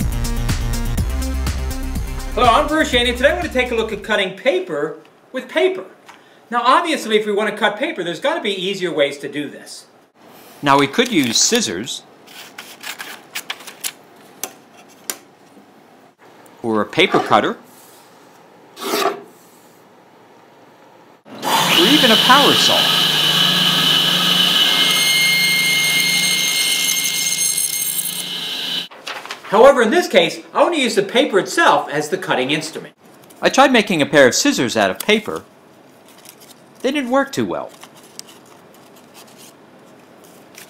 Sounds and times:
Speech: 2.4 - 9.9, 10.6 - 12.1, 16.6 - 17.6, 21.7 - 23.0, 29.5 - 35.5, 36.8 - 37.8.

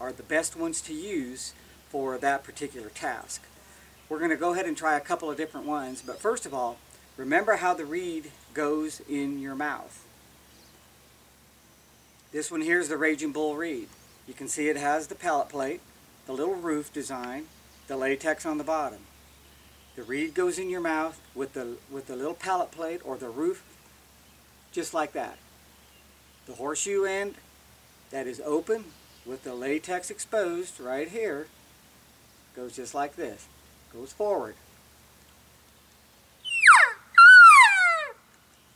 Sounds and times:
Speech: 0.0 - 3.5, 4.1 - 10.0, 12.4 - 19.1, 20.0 - 23.6, 24.7 - 25.4, 26.5 - 27.4, 28.1 - 31.5, 32.5 - 34.6.

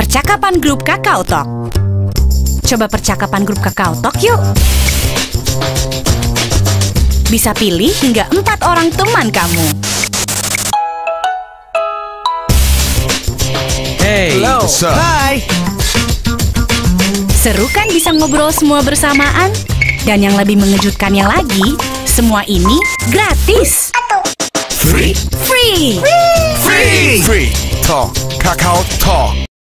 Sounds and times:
Music: 0.0 - 29.5
Speech: 7.3 - 9.8, 14.0 - 15.5, 17.4 - 23.9, 24.8 - 29.4.

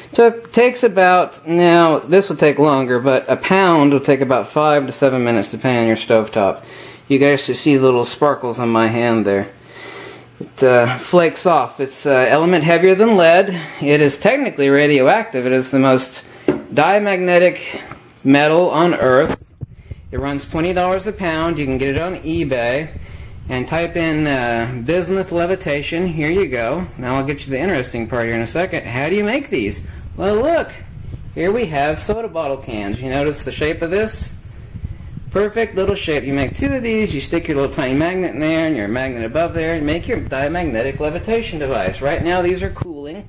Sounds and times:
Speech: 0.1 - 9.6, 10.4 - 19.4, 20.1 - 34.4, 35.3 - 43.2.

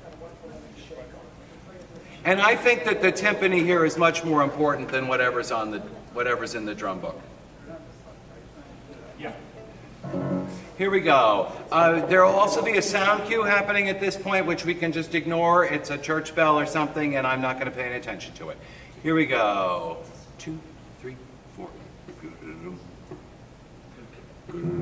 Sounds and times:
Speech: 0.0 - 9.6, 10.8 - 22.8.

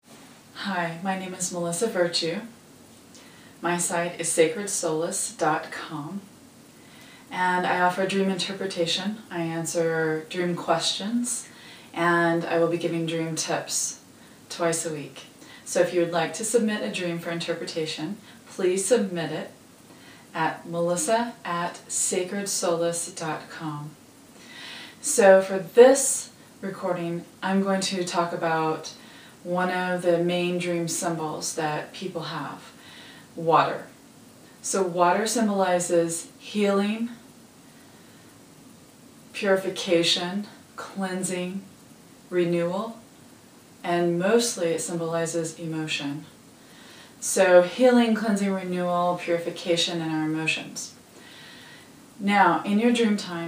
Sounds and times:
Speech: 0.6 - 2.6, 3.6 - 6.3, 7.3 - 19.6, 20.3 - 24.0, 25.0 - 32.8, 33.4 - 34.0, 34.6 - 37.2, 39.3 - 41.7, 42.3 - 43.0, 43.8 - 46.4, 47.2 - 51.0, 52.2 - 53.4.

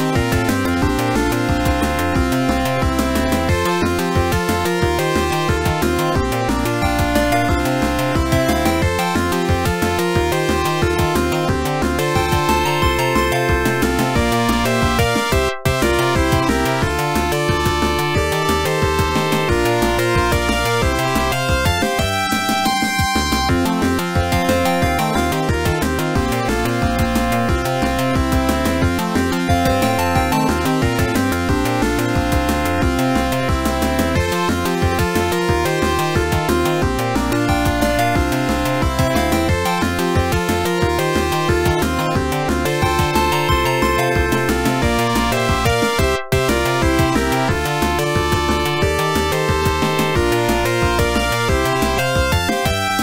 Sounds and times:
Funny music: 0.0 - 53.0.

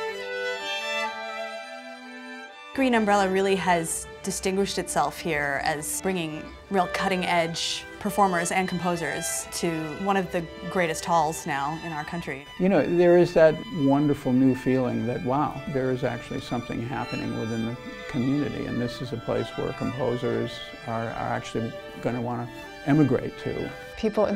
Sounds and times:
Music: 0.0 - 24.3
Speech: 2.8 - 24.3.

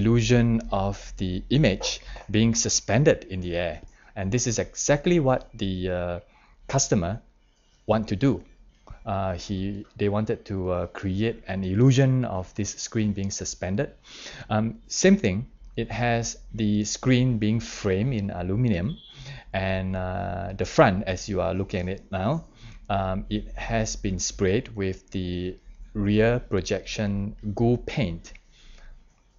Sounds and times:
Narration, monologue: 0.0 - 29.3.

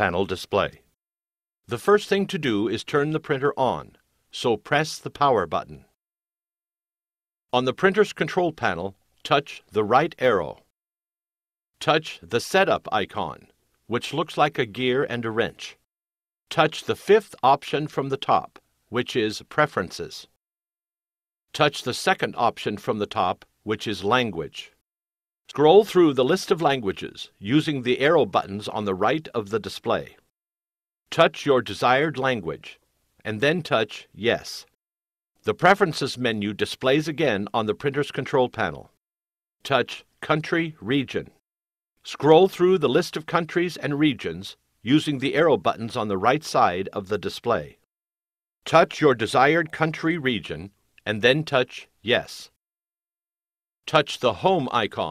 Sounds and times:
Speech: 0.0 - 0.9, 1.7 - 6.0, 7.5 - 10.7, 11.8 - 15.9, 16.5 - 20.4, 21.5 - 24.8, 25.5 - 30.3, 31.1 - 34.8, 35.4 - 39.0, 39.6 - 41.4, 42.0 - 47.8, 48.6 - 52.6, 53.8 - 55.1.

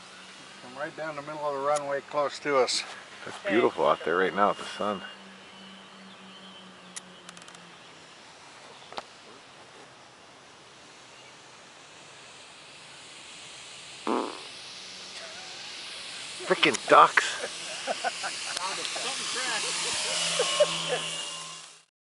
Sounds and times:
Outside, rural or natural: 0.0 - 21.9.

